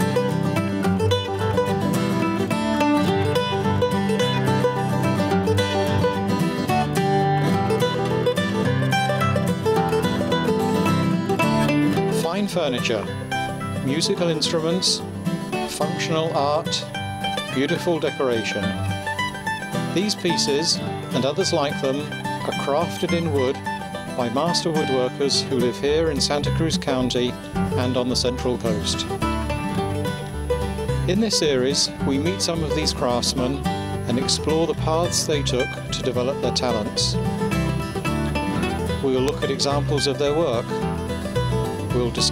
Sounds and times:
Music: 0.0s - 42.3s
Speech: 12.2s - 13.2s, 13.8s - 15.0s, 15.7s - 16.9s, 17.5s - 18.8s, 20.0s - 29.1s, 31.0s - 37.2s, 38.9s - 40.8s, 41.9s - 42.3s.

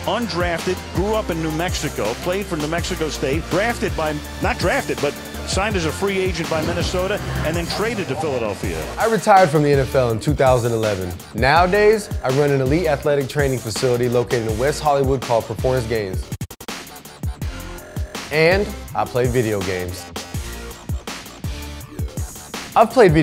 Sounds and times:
Speech: 0.0s - 16.3s, 18.3s - 20.1s, 22.8s - 23.2s
Music: 0.0s - 23.2s.

